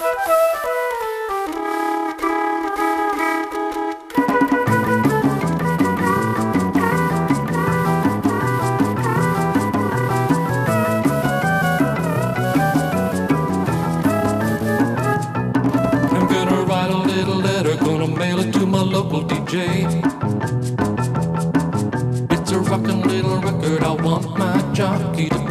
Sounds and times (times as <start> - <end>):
Musical instrument: 0.0 - 25.5.